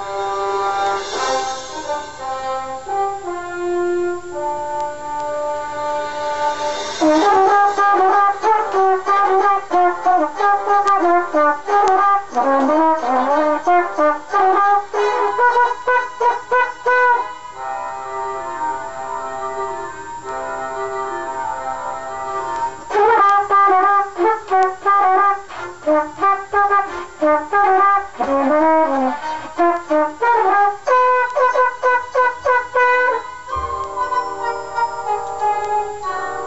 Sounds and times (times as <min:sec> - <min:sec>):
Trumpet: 0:00.0 - 0:36.4.